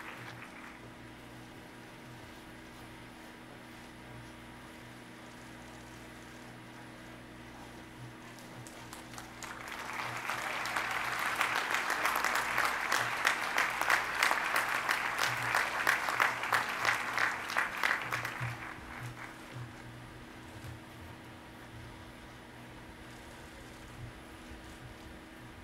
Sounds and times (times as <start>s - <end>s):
Applause: 0.0s - 1.2s, 8.3s - 20.6s.